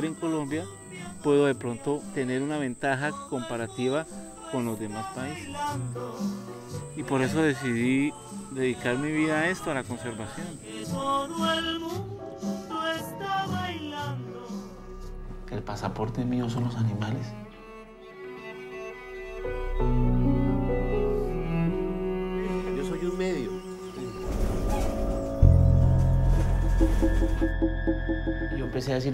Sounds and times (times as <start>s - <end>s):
Speech: 0.0s - 5.6s, 7.0s - 11.0s, 15.5s - 17.4s, 22.7s - 24.2s, 28.6s - 29.1s
Music: 0.0s - 29.1s.